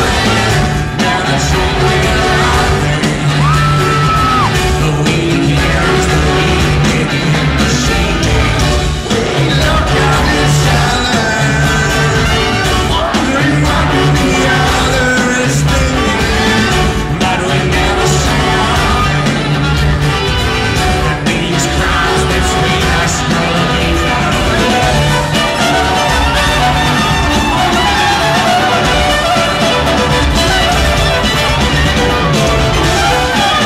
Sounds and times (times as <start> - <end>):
Inside, public space: 0.0 - 33.6
Music: 0.0 - 33.6
Singing: 0.0 - 33.6.